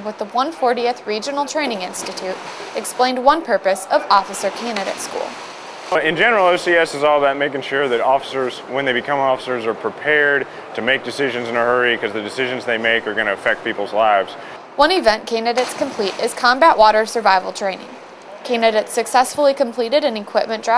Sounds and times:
Speech: 6.0 - 17.9.

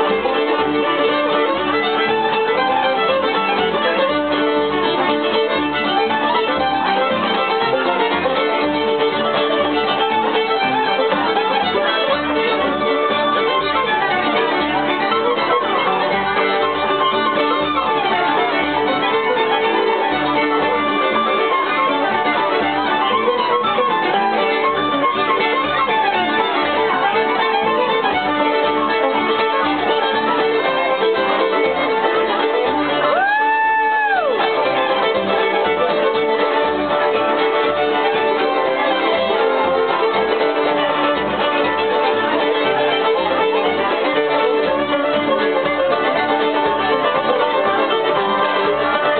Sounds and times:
Pizzicato: 0.0 - 49.1.

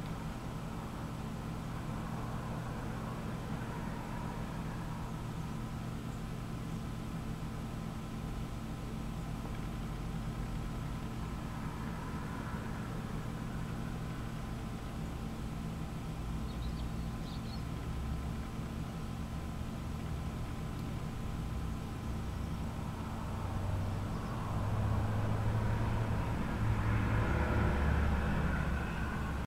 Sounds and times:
Chirp, tweet: 16.4 - 17.8, 24.0 - 24.5.

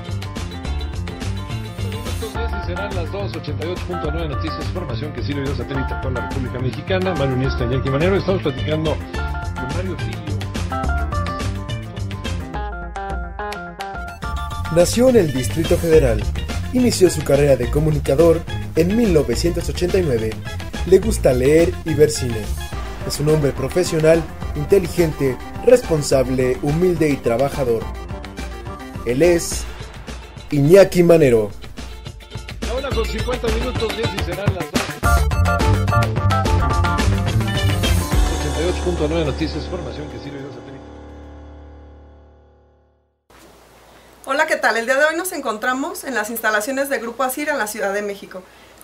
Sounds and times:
Music: 0.0 - 43.2
Speech: 2.3 - 9.0, 9.6 - 10.2, 14.7 - 27.9, 29.0 - 29.7, 30.5 - 31.6, 32.6 - 34.9, 38.2 - 40.9, 44.3 - 48.4.

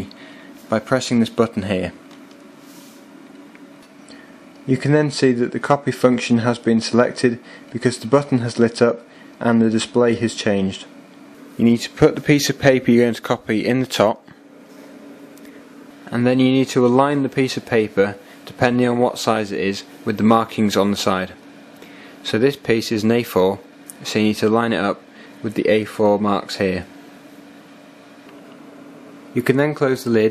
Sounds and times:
Speech: 0.0 - 2.0, 4.7 - 11.0, 11.6 - 14.3, 16.1 - 21.4, 22.2 - 26.9, 29.3 - 30.3.

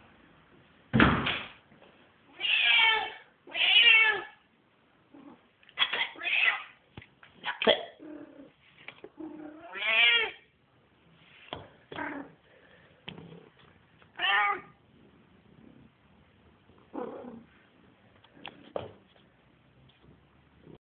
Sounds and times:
Meow: 2.3 - 4.4, 6.1 - 6.7, 9.6 - 10.4, 14.2 - 14.7.

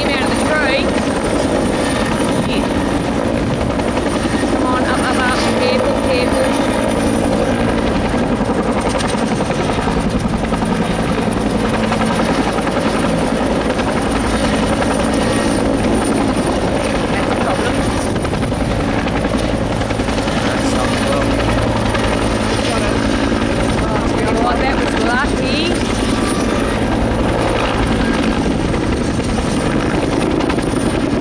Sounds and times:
Helicopter: 0.0 - 31.2
Speech: 4.6 - 6.6, 16.8 - 17.9, 20.4 - 21.4, 23.8 - 25.8.

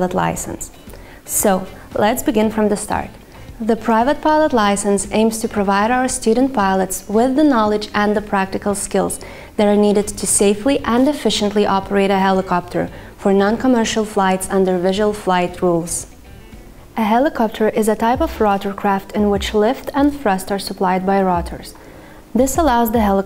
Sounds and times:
Speech: 0.0 - 16.1, 17.0 - 21.8, 22.4 - 23.2
Music: 0.0 - 23.2.

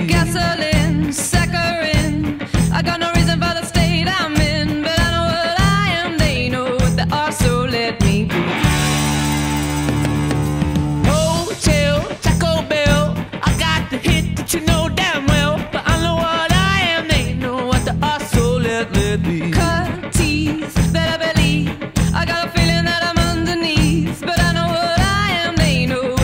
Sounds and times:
Pop music: 0.0 - 26.2.

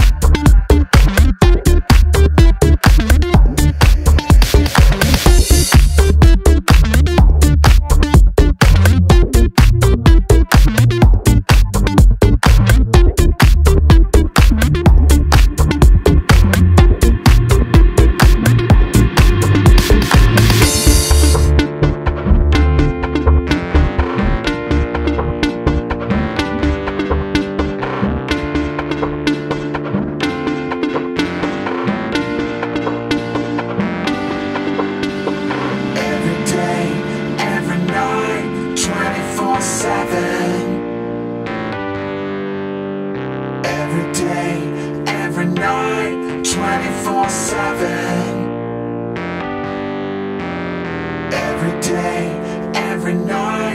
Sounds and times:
Drum machine: 0.0 - 36.5
Sampler: 0.0 - 40.5.

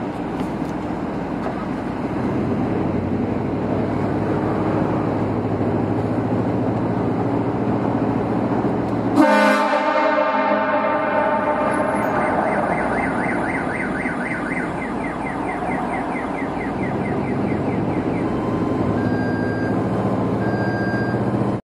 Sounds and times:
Car alarm: 9.2 - 19.8.

